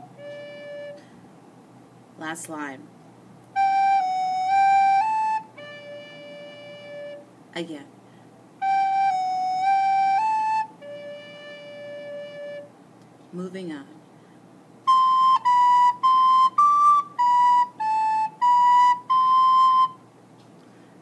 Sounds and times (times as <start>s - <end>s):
Flute: 0.0s - 1.1s, 3.6s - 7.3s, 8.6s - 12.7s, 14.8s - 20.0s.